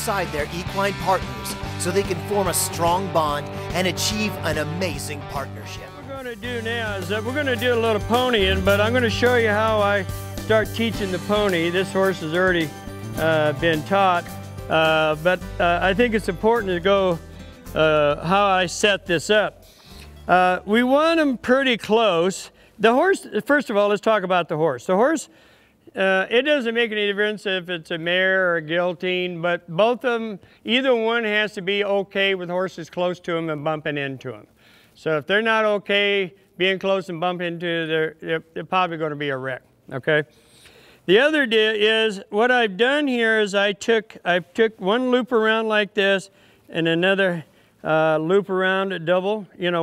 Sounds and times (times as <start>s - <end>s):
Speech: 0.0s - 17.2s, 17.8s - 19.6s, 20.3s - 25.3s, 25.9s - 40.3s, 41.1s - 49.8s
Music: 0.0s - 21.9s.